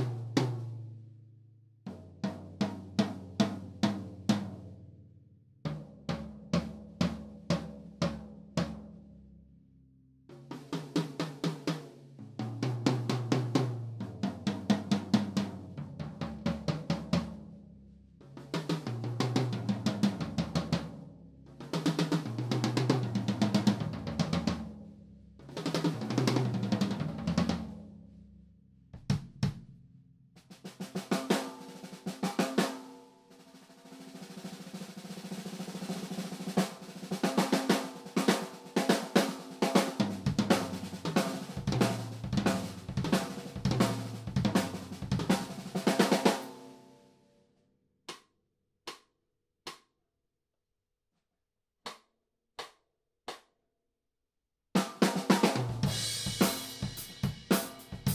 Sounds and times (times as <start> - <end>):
Drum: 0.0 - 0.9, 1.9 - 4.7, 5.7 - 9.0, 10.3 - 17.5, 18.2 - 21.0, 21.6 - 24.8, 25.5 - 27.9, 29.0 - 29.8, 30.4 - 46.6, 54.8 - 58.1
Drum kit: 0.0 - 0.9, 1.9 - 4.7, 5.7 - 9.0, 10.3 - 17.6, 18.2 - 24.8, 25.4 - 27.9, 29.0 - 29.8, 30.4 - 46.7, 54.8 - 58.1.